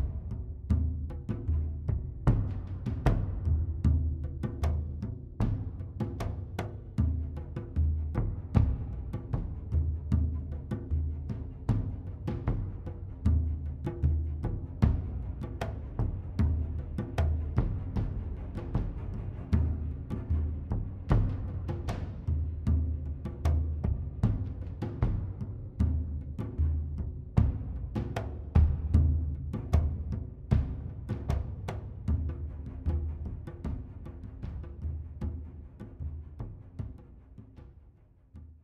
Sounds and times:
Timpani: 0.0s - 38.0s.

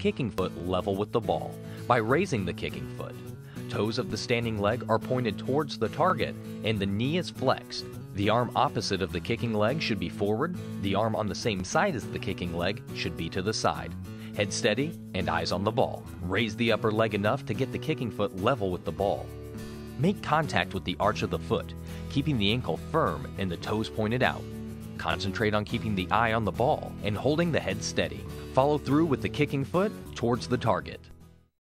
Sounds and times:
Speech: 0.0s - 19.3s, 20.0s - 31.1s
Music: 0.0s - 31.6s.

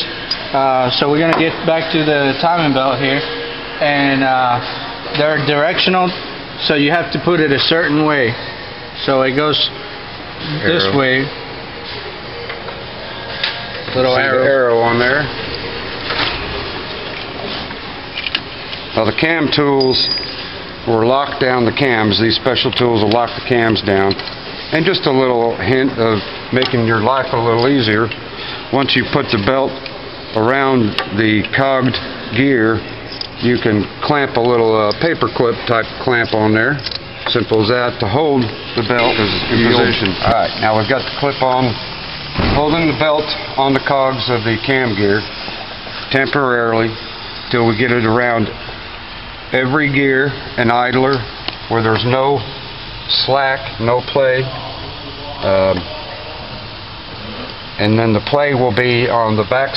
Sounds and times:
Speech: 0.5s - 8.4s, 13.8s - 15.3s, 19.0s - 20.0s, 20.9s - 32.8s, 33.4s - 41.8s, 42.4s - 45.3s, 46.1s - 48.6s, 49.5s - 52.5s, 53.1s - 56.7s, 57.8s - 59.7s.

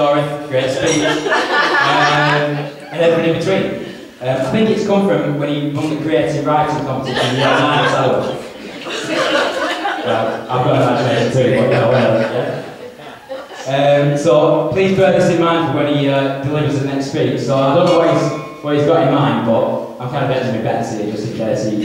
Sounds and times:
Male speech, man speaking: 0.0s - 1.2s, 1.8s - 8.5s, 10.0s - 12.7s, 13.7s - 21.8s
Narration, monologue: 0.0s - 13.0s, 13.6s - 21.8s.

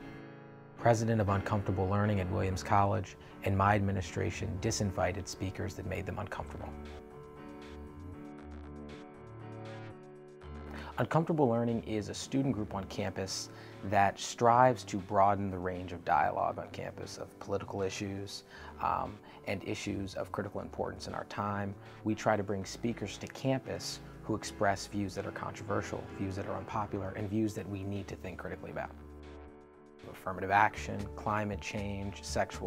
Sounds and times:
Narration, monologue: 0.0s - 32.6s
Male speech, man speaking: 0.8s - 6.9s, 11.0s - 29.0s, 30.0s - 32.6s.

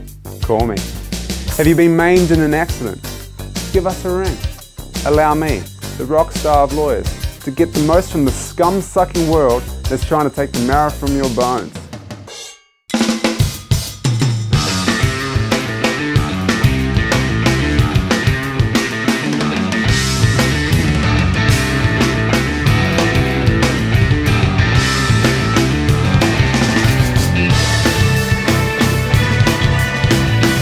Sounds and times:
Music: 0.0s - 30.6s.

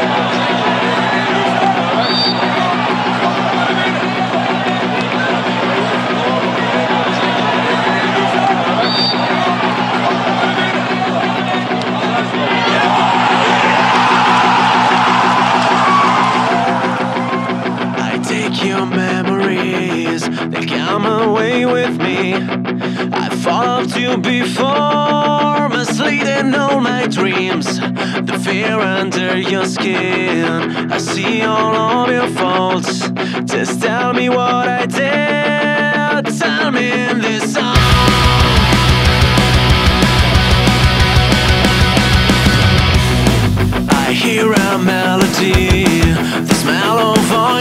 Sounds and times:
Music: 0.0s - 47.6s.

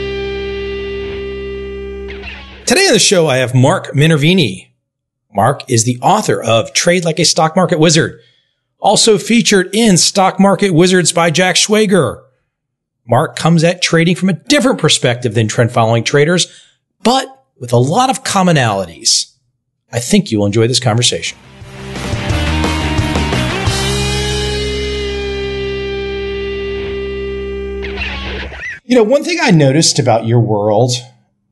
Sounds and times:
Speech: 2.7s - 4.7s, 5.3s - 8.2s, 8.8s - 12.3s, 13.1s - 21.4s, 28.8s - 31.2s.

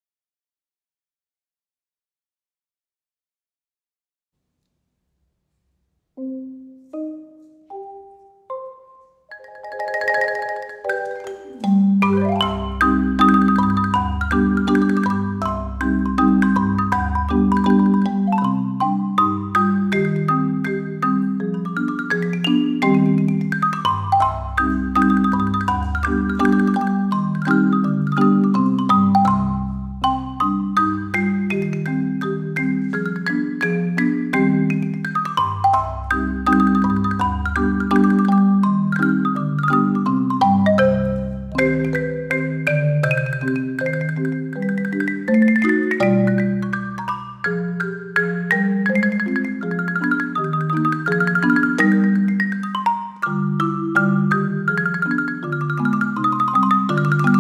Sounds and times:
Marimba, xylophone: 6.2s - 57.4s.

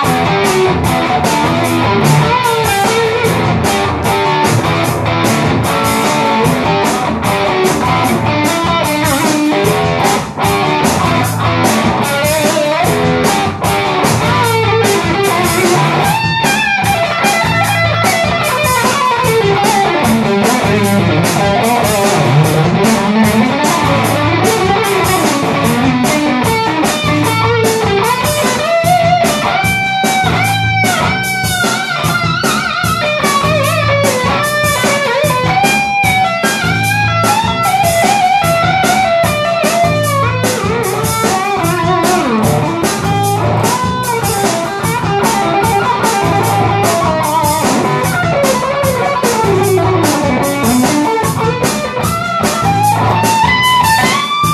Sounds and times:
Electric guitar: 0.0s - 54.5s.

